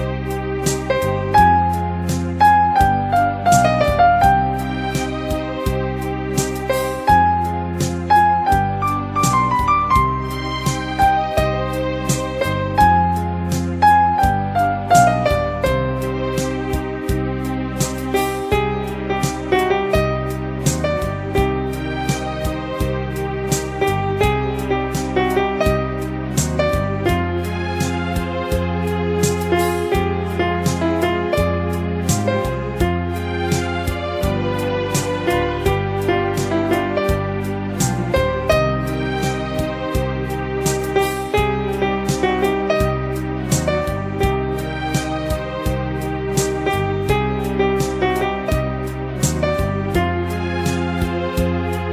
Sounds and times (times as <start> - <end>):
Background music: 0.0 - 51.9.